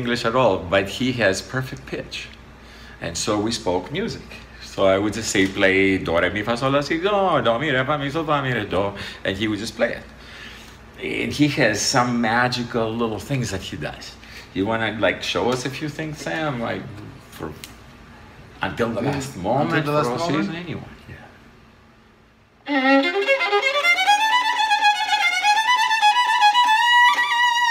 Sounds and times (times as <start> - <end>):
Speech: 0.0 - 2.4, 3.0 - 10.1, 11.0 - 17.7, 18.6 - 21.4.